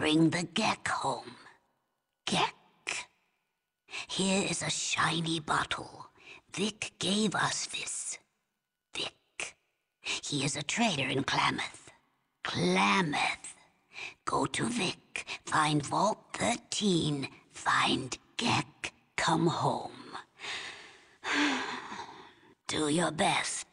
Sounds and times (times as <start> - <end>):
Female speech, woman speaking: 0.0 - 1.4, 14.3 - 19.9, 22.7 - 23.7
Speech synthesizer: 0.0 - 1.6, 2.2 - 3.1, 4.1 - 8.3, 10.2 - 13.6, 14.2 - 20.3, 22.7 - 23.7
Narration, monologue: 0.0 - 23.7.